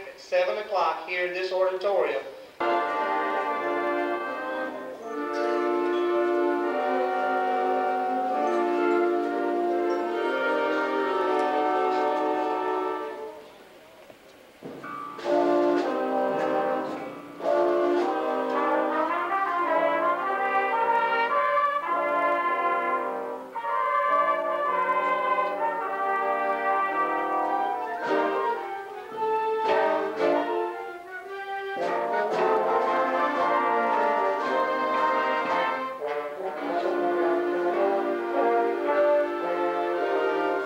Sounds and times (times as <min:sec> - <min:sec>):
Inside, large room or hall: 0:00.0 - 0:40.6
Music: 0:02.5 - 0:13.8, 0:14.6 - 0:40.6.